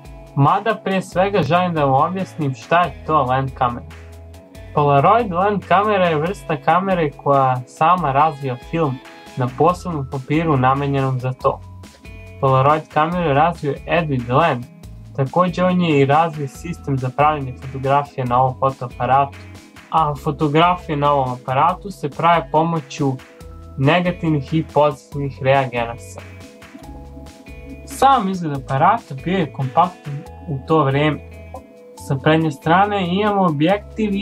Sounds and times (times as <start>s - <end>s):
Music: 0.0s - 34.2s
Speech: 0.4s - 3.9s, 4.8s - 11.6s, 12.4s - 23.2s, 23.8s - 26.3s, 27.9s - 31.2s, 32.0s - 34.2s.